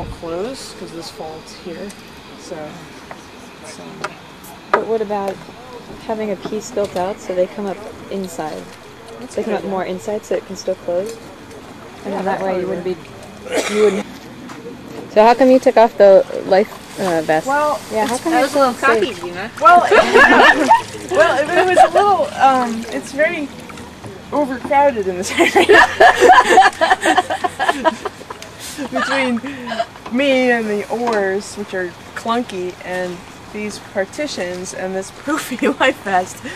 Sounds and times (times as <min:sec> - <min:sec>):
Trickle, dribble: 0:20.3 - 0:24.6.